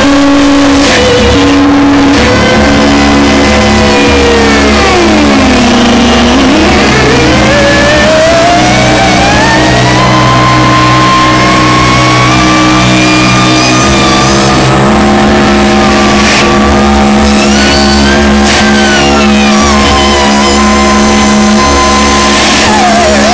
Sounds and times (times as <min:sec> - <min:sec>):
Electronic music: 0:00.0 - 0:23.3
Noise: 0:00.0 - 0:23.3
Theremin: 0:00.0 - 0:23.3.